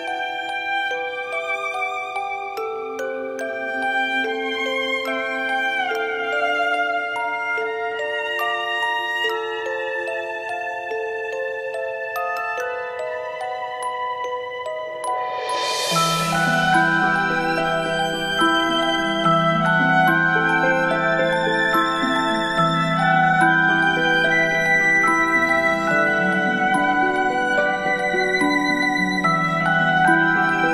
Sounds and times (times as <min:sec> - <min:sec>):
Music: 0:00.0 - 0:30.7.